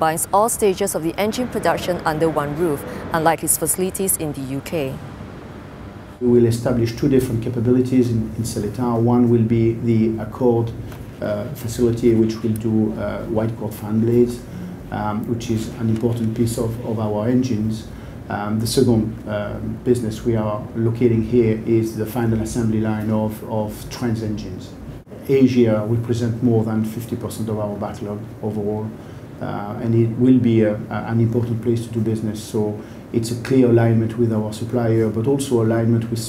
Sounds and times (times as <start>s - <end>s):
Speech: 0.0s - 5.0s, 6.2s - 36.2s.